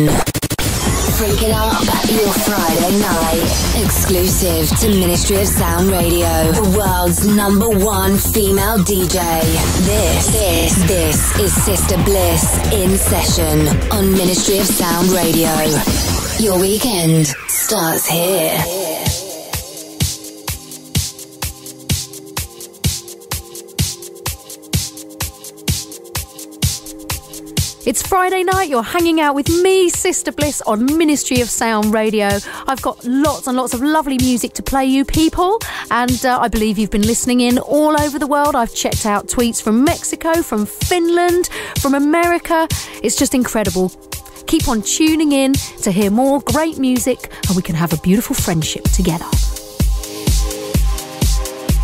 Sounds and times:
Speech: 0.0 - 0.2, 1.1 - 19.0, 27.8 - 49.4
House music: 0.0 - 51.8.

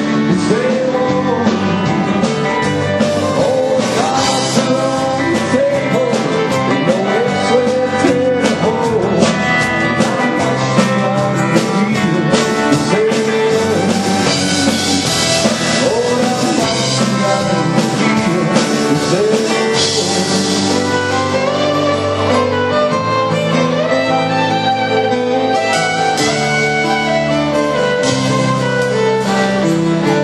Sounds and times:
Country: 0.0 - 30.2
Theme music: 0.0 - 30.2.

